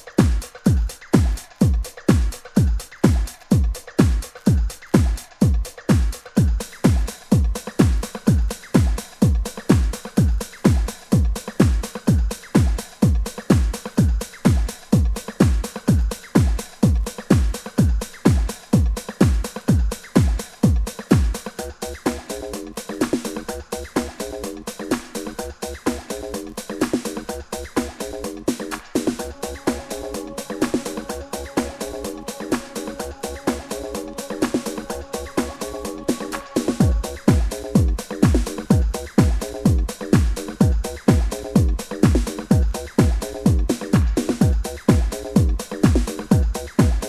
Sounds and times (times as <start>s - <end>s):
Electronic music: 0.0s - 47.0s.